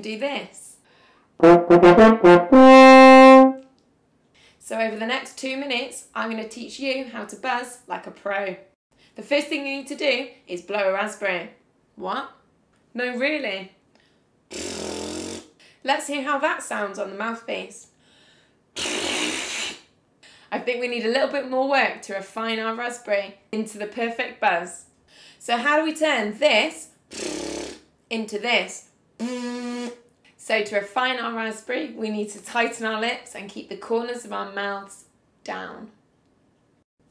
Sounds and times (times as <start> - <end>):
Speech: 0.0 - 0.8, 4.6 - 12.4, 13.0 - 13.8, 15.8 - 17.8, 20.5 - 24.8, 25.4 - 26.9, 28.1 - 28.9, 30.4 - 36.0.